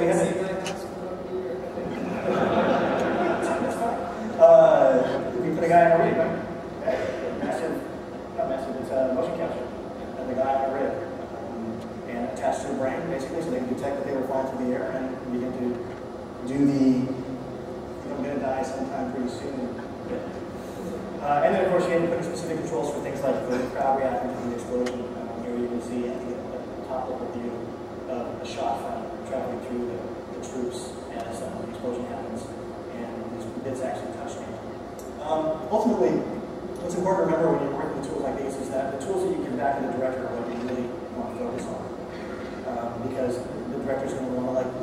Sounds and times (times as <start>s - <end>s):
Speech: 0.0s - 2.4s, 3.0s - 17.3s, 18.0s - 20.4s, 21.2s - 42.0s, 42.6s - 44.8s.